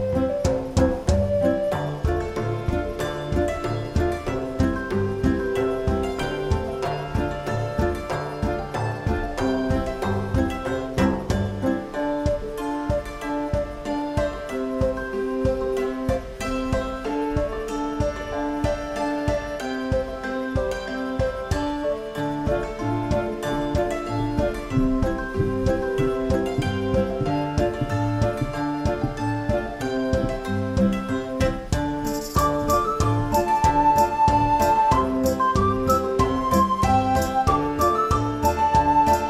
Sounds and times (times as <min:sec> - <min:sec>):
Music: 0:00.0 - 0:39.2.